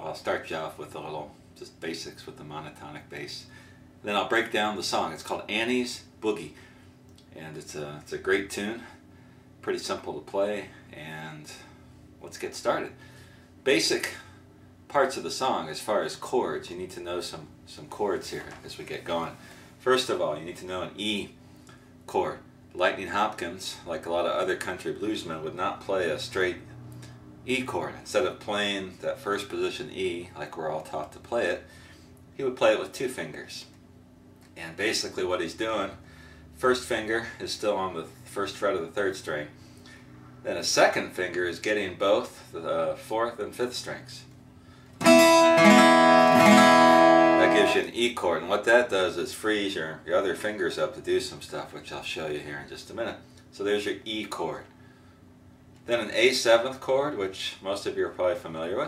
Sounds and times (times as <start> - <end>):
Speech: 0.0 - 6.6, 7.2 - 9.0, 9.6 - 13.0, 13.6 - 21.4, 22.1 - 26.7, 27.5 - 31.7, 32.3 - 33.8, 34.5 - 36.0, 36.6 - 39.6, 40.4 - 44.4, 47.4 - 54.8, 55.8 - 58.8.